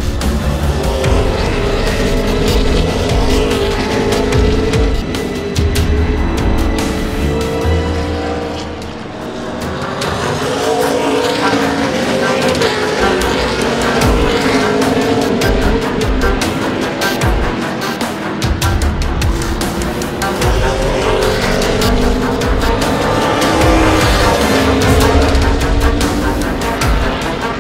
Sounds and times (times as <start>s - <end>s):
Music: 0.0s - 27.6s
Race car, auto racing: 0.0s - 27.6s.